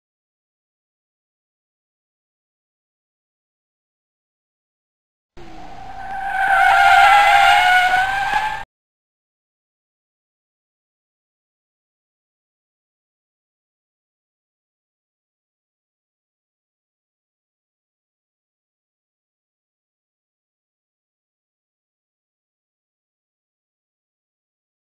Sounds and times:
Silence: 5.4s - 8.6s
Car: 5.4s - 8.7s.

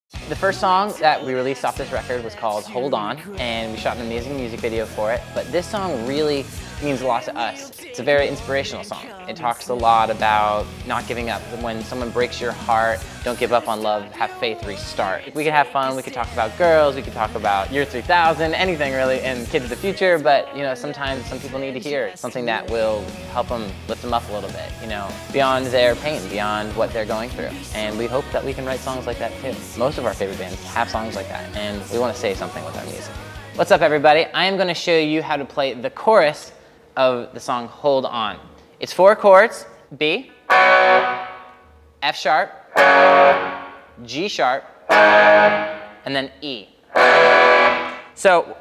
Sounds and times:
Music: 0.1s - 35.4s, 40.5s - 41.6s, 42.8s - 44.0s, 44.9s - 46.1s, 47.0s - 48.2s
Speech: 0.2s - 40.3s, 42.0s - 42.6s, 44.0s - 44.7s, 46.1s - 46.8s, 48.2s - 48.6s.

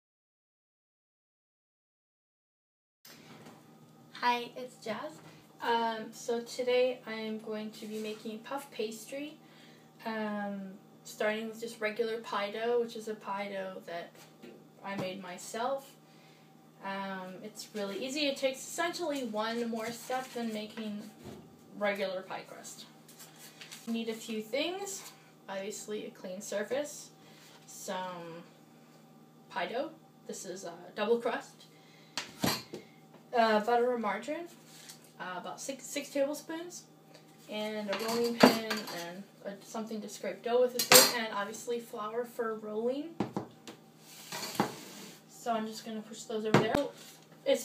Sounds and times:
Speech: 4.2s - 9.4s, 10.0s - 14.2s, 14.8s - 16.0s, 16.8s - 21.1s, 21.8s - 22.9s, 23.9s - 27.1s, 27.7s - 28.5s, 29.5s - 31.7s, 33.3s - 34.6s, 35.2s - 36.9s, 37.5s - 43.2s, 45.3s - 47.6s.

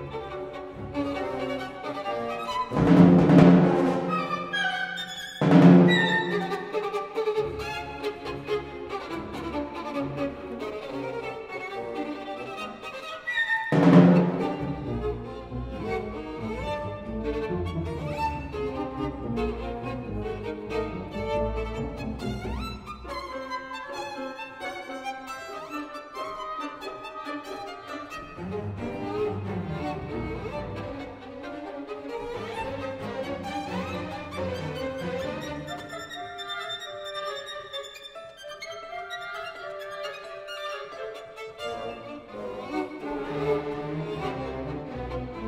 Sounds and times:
Violin, fiddle: 0.0s - 45.4s.

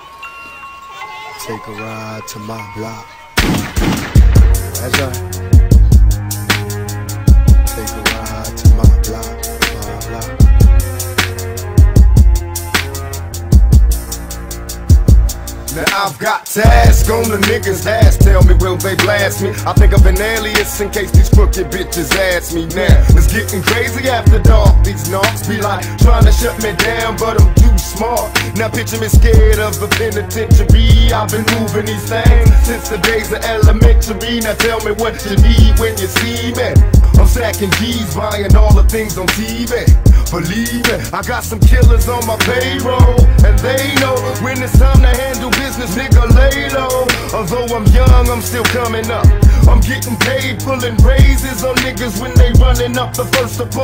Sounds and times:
Music: 0.0s - 53.8s.

